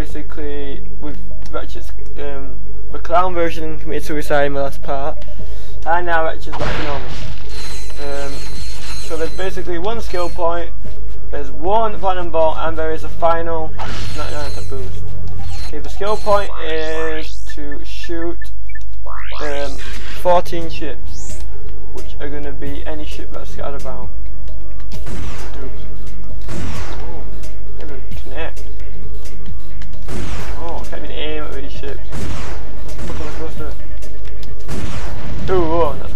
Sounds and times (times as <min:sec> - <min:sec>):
Speech: 0:00.0 - 0:05.2, 0:05.8 - 0:07.1, 0:08.0 - 0:08.4, 0:09.1 - 0:10.7, 0:11.3 - 0:14.9, 0:15.8 - 0:18.4, 0:19.3 - 0:21.0, 0:22.0 - 0:24.1, 0:27.9 - 0:28.6, 0:30.6 - 0:32.0, 0:33.1 - 0:33.8, 0:35.5 - 0:36.1
Music: 0:00.0 - 0:36.1.